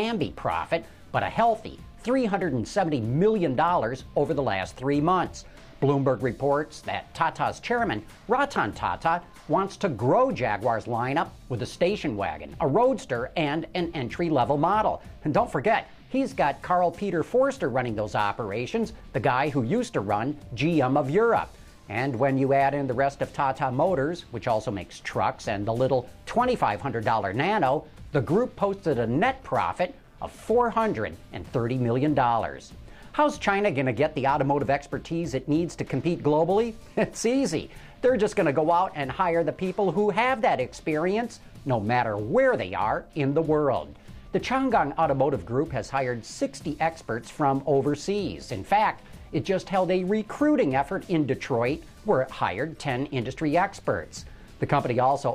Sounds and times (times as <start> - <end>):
Music: 0.0 - 55.3
Speech: 0.0 - 55.3.